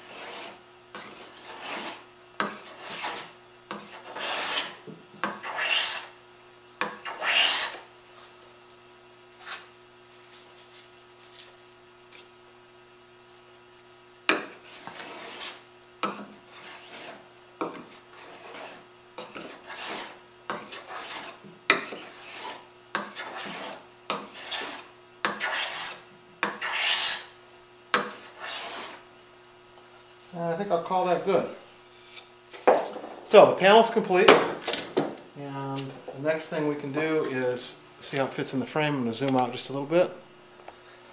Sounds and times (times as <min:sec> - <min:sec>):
Rub: 0:00.0 - 0:02.0, 0:02.6 - 0:04.8, 0:05.4 - 0:06.1, 0:14.6 - 0:15.6, 0:16.5 - 0:17.2, 0:18.1 - 0:18.8, 0:19.4 - 0:26.0, 0:26.6 - 0:27.3, 0:28.2 - 0:29.0
Filing (rasp): 0:00.0 - 0:06.1, 0:06.8 - 0:07.9, 0:14.4 - 0:27.4, 0:28.0 - 0:29.0.